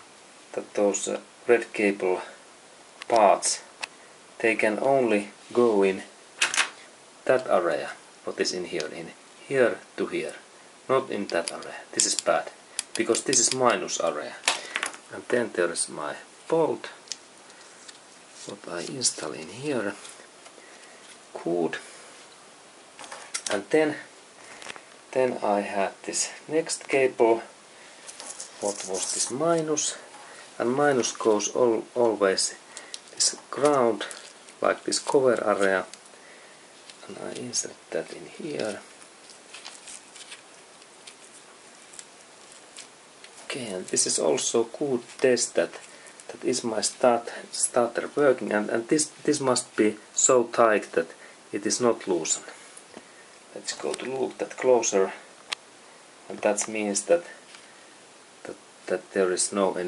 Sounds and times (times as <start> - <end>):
Speech: 0.5 - 2.4, 3.1 - 3.7, 4.4 - 6.2, 7.2 - 14.5, 15.1 - 17.0, 18.4 - 20.0, 21.3 - 21.9, 23.5 - 24.1, 25.1 - 27.5, 28.6 - 32.6, 33.2 - 36.0, 37.0 - 38.9, 43.5 - 52.6, 53.5 - 55.3, 56.3 - 57.4, 58.4 - 59.8.